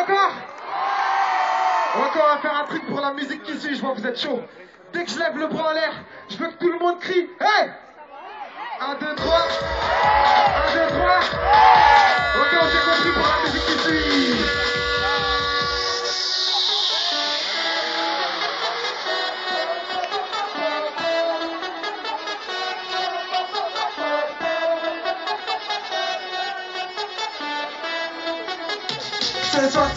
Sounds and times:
Music: 9.2s - 29.9s.

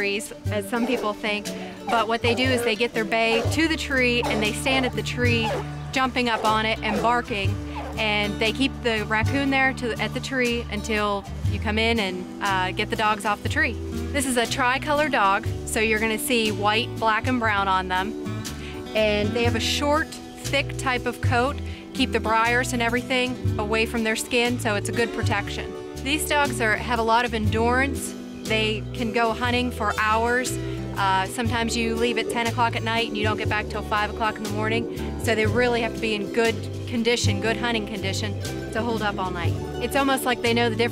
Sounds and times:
Speech: 0.0s - 18.1s, 18.9s - 40.9s
Music: 0.0s - 40.9s.

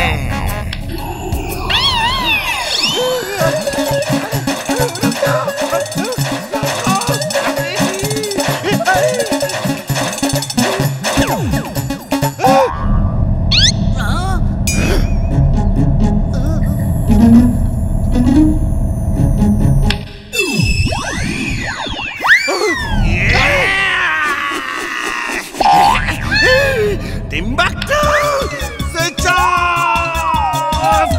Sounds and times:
Music: 0.0s - 12.7s, 14.7s - 20.4s, 26.2s - 31.1s.

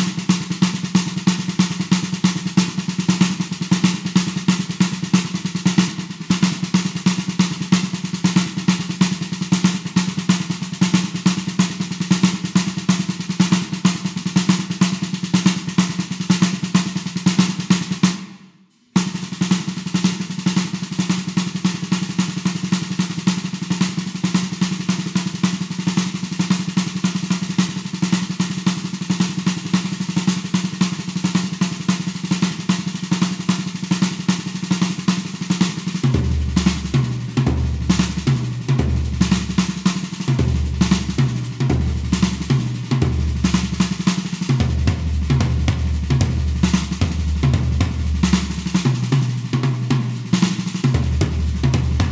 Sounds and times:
Drum: 0.0s - 52.1s.

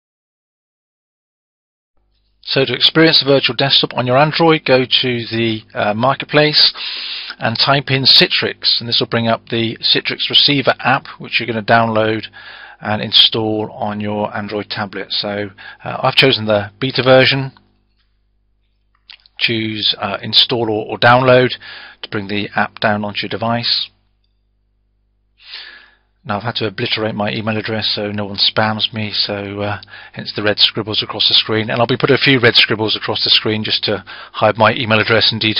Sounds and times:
Speech: 2.4s - 6.8s, 7.4s - 17.6s, 19.4s - 24.0s, 26.2s - 35.5s.

